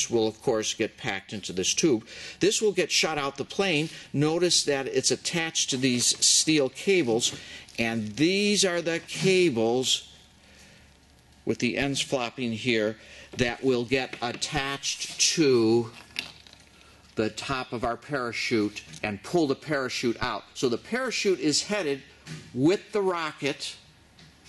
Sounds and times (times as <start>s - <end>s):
Speech: 0.0s - 10.1s, 11.5s - 16.0s, 17.2s - 23.8s.